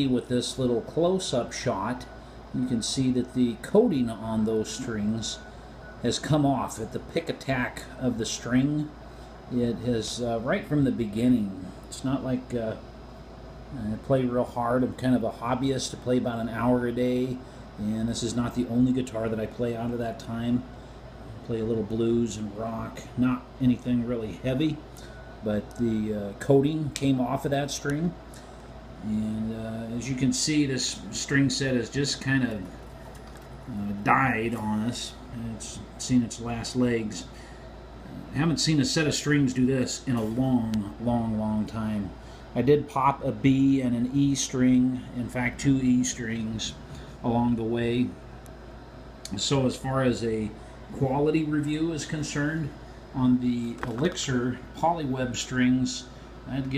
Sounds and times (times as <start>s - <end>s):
Speech: 0.0s - 12.9s, 13.7s - 20.7s, 21.4s - 28.2s, 29.0s - 32.8s, 33.7s - 37.4s, 38.1s - 48.2s, 49.3s - 56.7s.